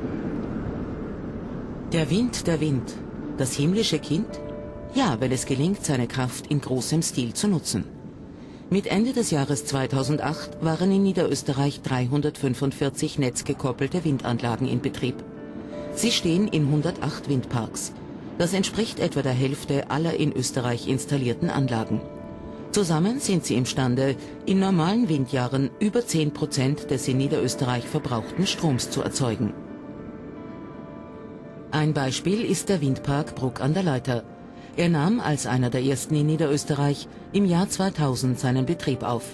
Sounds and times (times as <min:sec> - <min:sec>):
Speech: 0:02.0 - 0:04.4, 0:05.0 - 0:07.9, 0:08.7 - 0:15.2, 0:16.0 - 0:22.1, 0:22.8 - 0:29.6, 0:31.8 - 0:39.3.